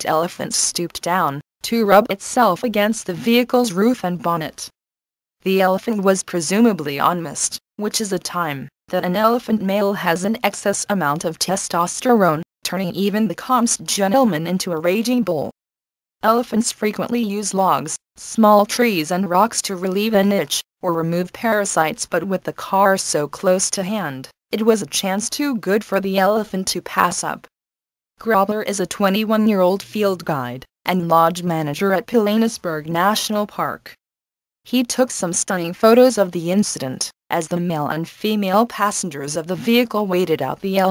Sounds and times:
Speech: 0.0s - 4.8s, 5.4s - 15.5s, 16.2s - 27.5s, 28.2s - 34.0s, 34.7s - 40.9s.

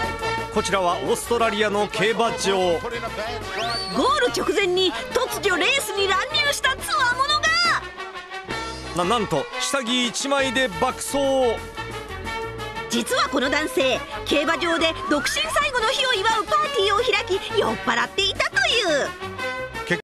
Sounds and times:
Music: 0.0s - 20.0s.

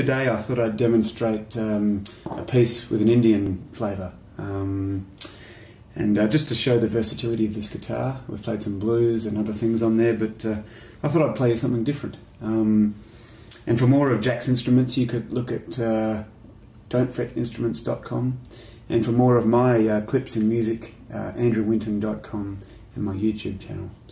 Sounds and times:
Speech: 0.0s - 5.1s, 5.9s - 13.0s, 13.6s - 24.1s.

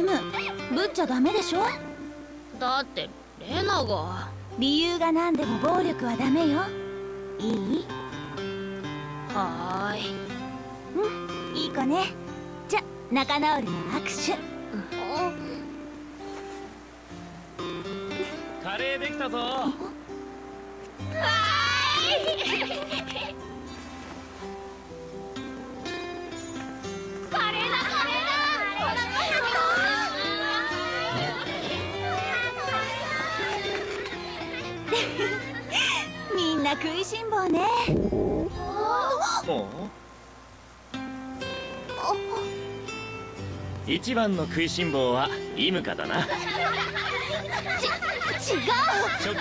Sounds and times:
Music: 0.0s - 49.4s.

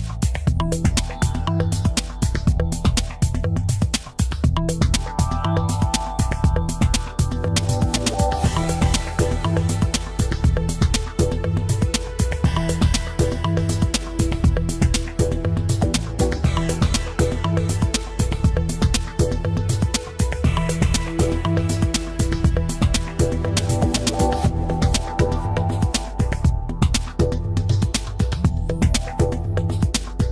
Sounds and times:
Music: 0.0s - 30.3s.

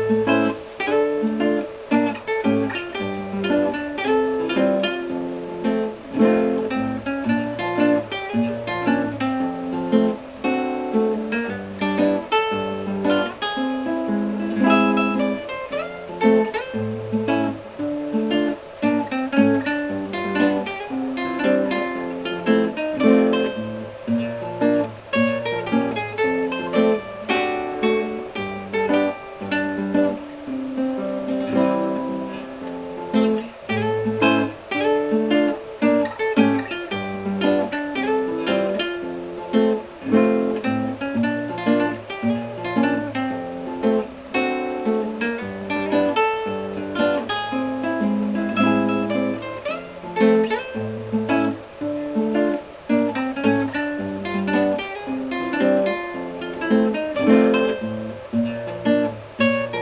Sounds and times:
Acoustic guitar: 0.0s - 59.8s
Strum: 0.0s - 59.8s.

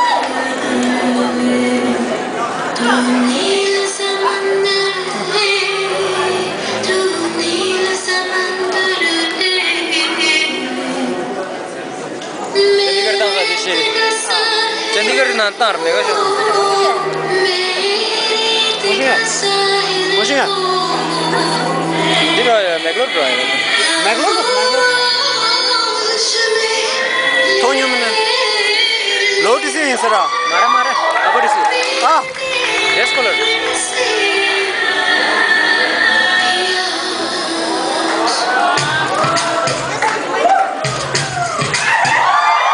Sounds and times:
Music: 0.0s - 11.4s, 12.6s - 42.7s
Singing: 0.0s - 11.5s, 12.5s - 40.0s
Inside, large room or hall: 0.0s - 42.7s
Inside, public space: 0.0s - 42.7s.

